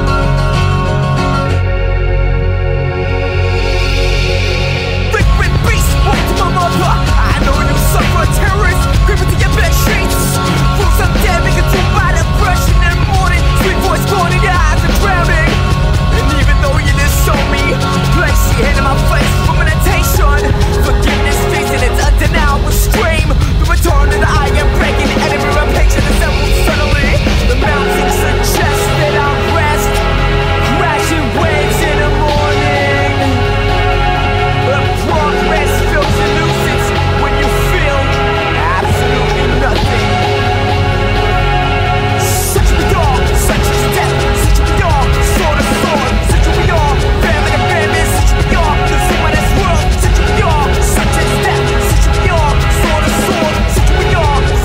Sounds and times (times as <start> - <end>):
Music: 0.0 - 54.6.